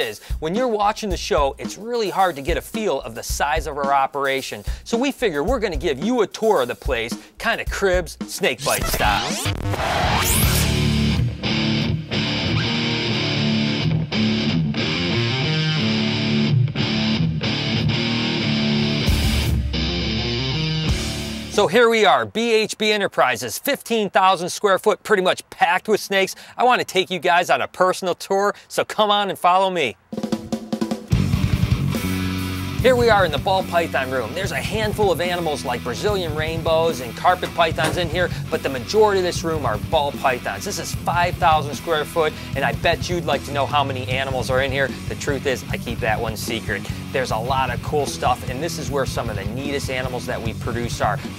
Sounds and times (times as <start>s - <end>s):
Speech: 0.0s - 9.4s, 21.5s - 30.0s, 32.8s - 51.3s
Heavy metal: 8.6s - 21.6s, 31.1s - 39.9s.